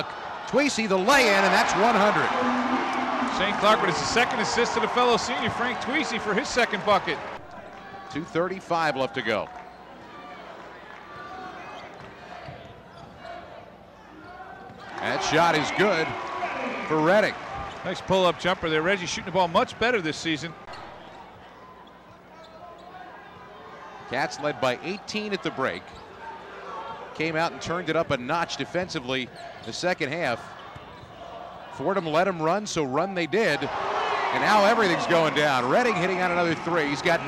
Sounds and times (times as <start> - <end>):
Speech: 0.5 - 2.4, 3.3 - 7.2, 8.1 - 9.5, 15.0 - 20.6, 24.1 - 25.9, 27.1 - 30.5, 31.8 - 33.7, 34.3 - 37.2.